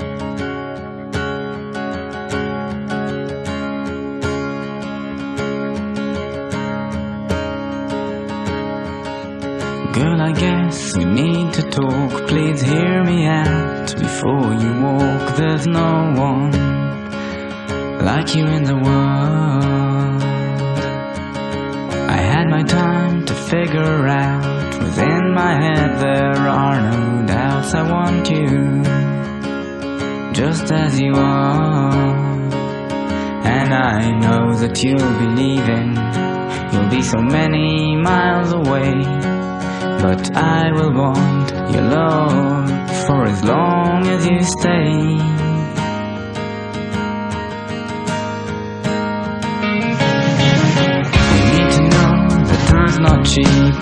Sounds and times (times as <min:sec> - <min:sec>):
Music: 0:00.0 - 0:53.8.